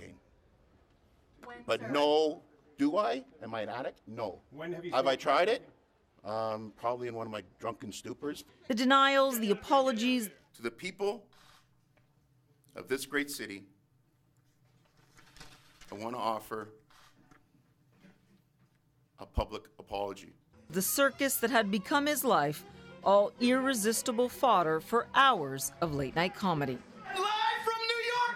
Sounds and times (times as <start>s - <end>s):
Inside, large room or hall: 0.0s - 19.1s, 25.5s - 28.3s.